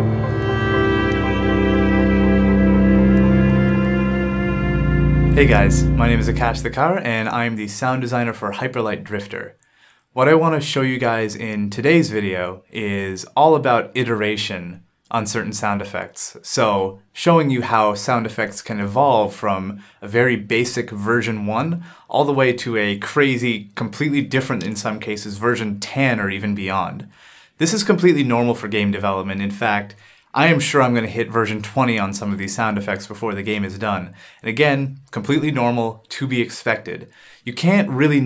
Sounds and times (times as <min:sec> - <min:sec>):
Speech: 0:05.4 - 0:09.6, 0:10.2 - 0:38.2.